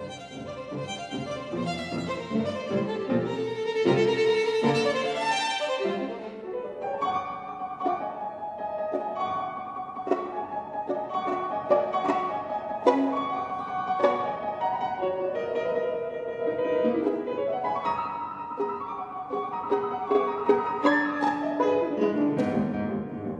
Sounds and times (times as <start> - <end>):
Violin, fiddle: 0.0 - 22.1.